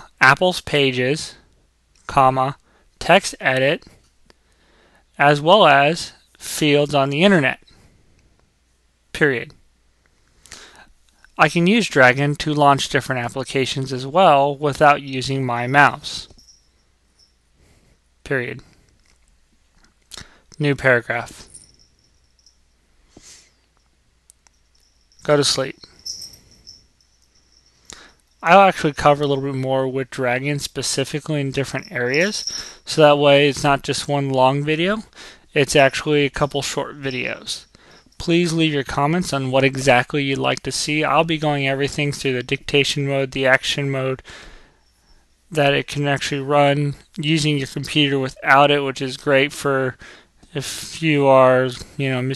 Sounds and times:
Speech: 0.0s - 1.4s, 2.1s - 3.9s, 5.2s - 7.7s, 9.1s - 9.6s, 11.4s - 16.4s, 18.2s - 18.7s, 20.6s - 21.5s, 25.2s - 25.8s, 28.4s - 44.2s, 45.5s - 52.3s.

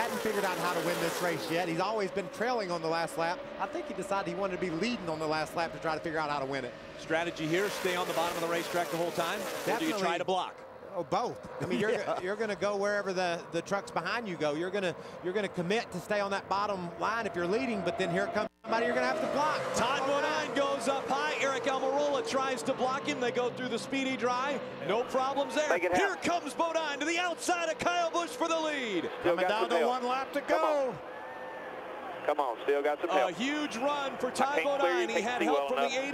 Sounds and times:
Speech: 0.0s - 31.0s, 32.3s - 36.1s
Car: 0.0s - 36.1s.

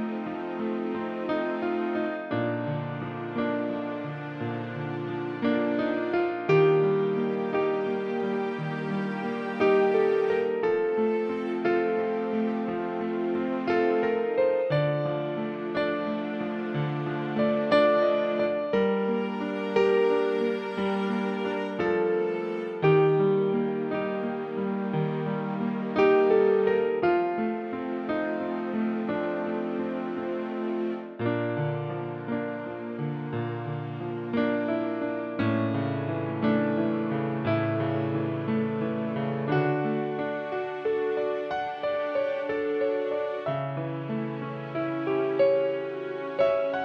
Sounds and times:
Music: 0.0s - 46.8s.

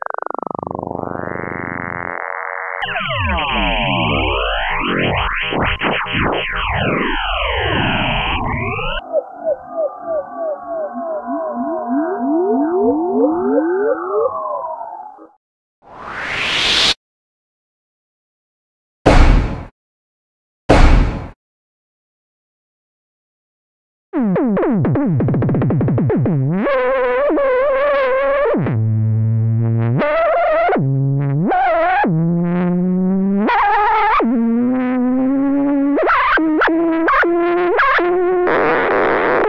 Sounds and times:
Synthesizer: 0.0s - 15.4s.

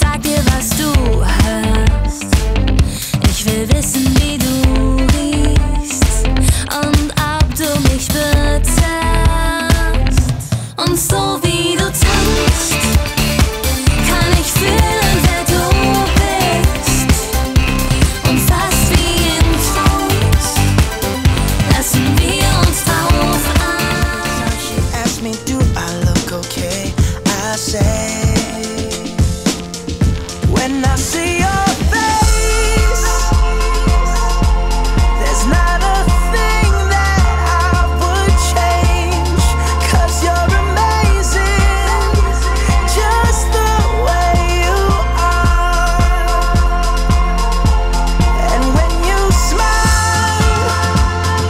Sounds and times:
Soul music: 0.0s - 51.5s.

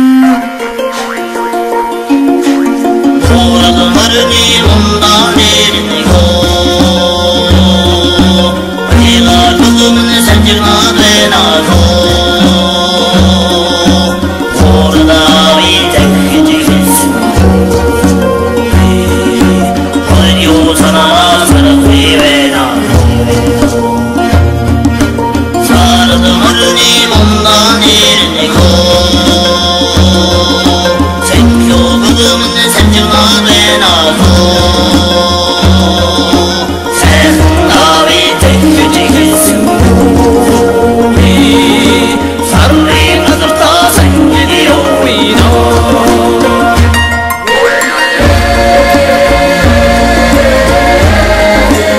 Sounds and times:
Folk music: 0.0s - 51.9s.

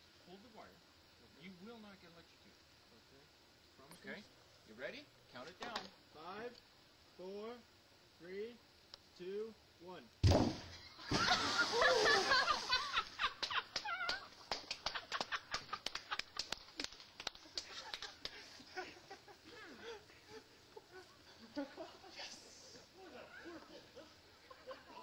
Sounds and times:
Speech: 9.2s - 10.1s.

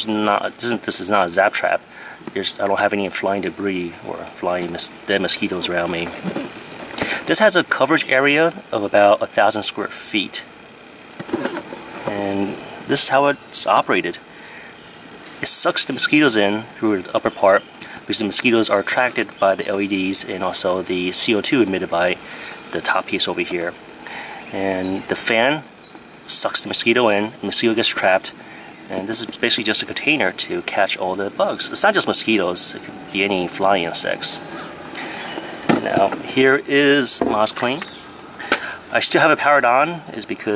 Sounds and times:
Speech: 0.0s - 10.5s, 12.0s - 14.3s, 15.4s - 23.8s, 24.5s - 25.7s, 26.3s - 34.5s, 35.7s - 37.9s, 38.8s - 40.5s.

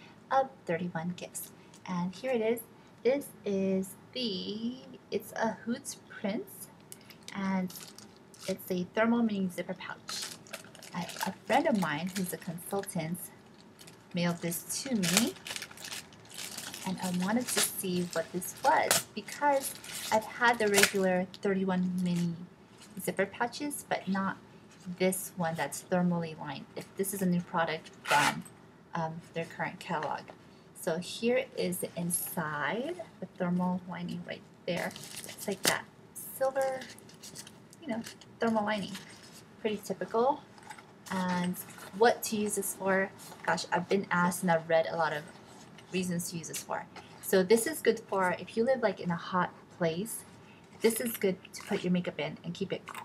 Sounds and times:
Speech: 0.3s - 6.7s, 7.3s - 7.9s, 8.5s - 10.2s, 10.9s - 13.3s, 14.2s - 15.4s, 16.8s - 28.4s, 29.0s - 36.9s, 37.8s - 39.0s, 39.6s - 40.4s, 41.1s - 45.3s, 45.9s - 53.0s
Zipper (clothing): 28.1s - 28.4s.

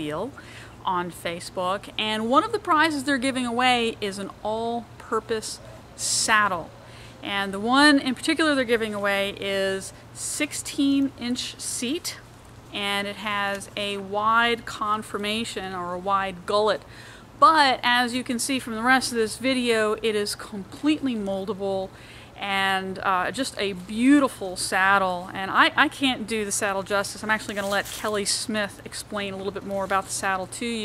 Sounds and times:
Speech: 0.0s - 12.2s, 12.8s - 16.8s, 17.4s - 30.8s.

